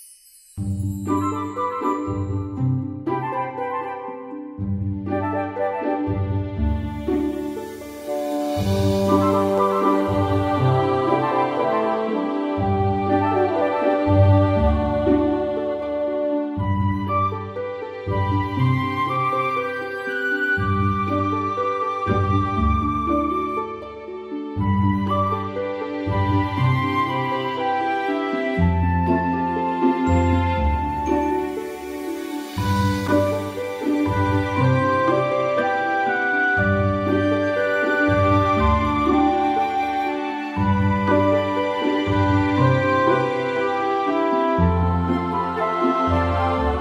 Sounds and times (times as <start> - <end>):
Music: 0.0 - 46.8.